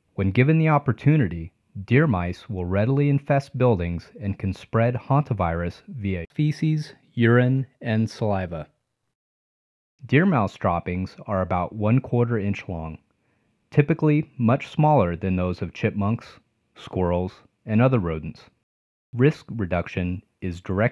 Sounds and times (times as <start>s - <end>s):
Speech: 0.2s - 8.8s, 10.0s - 13.1s, 13.7s - 18.6s, 19.2s - 20.9s.